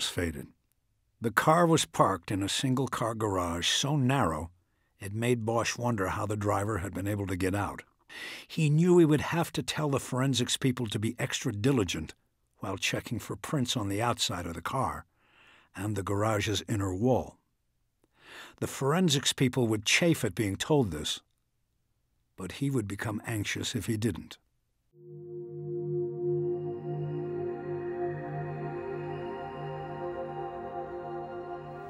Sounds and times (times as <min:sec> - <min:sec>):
Speech: 0:00.0 - 0:00.6, 0:01.2 - 0:15.1, 0:15.8 - 0:17.4, 0:18.6 - 0:21.3, 0:22.4 - 0:24.5.